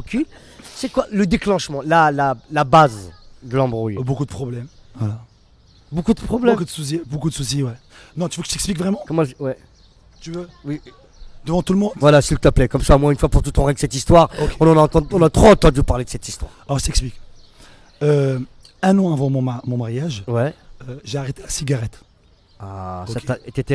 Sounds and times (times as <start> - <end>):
Speech: 0.0 - 5.3, 5.9 - 9.6, 10.2 - 17.2, 22.6 - 23.7.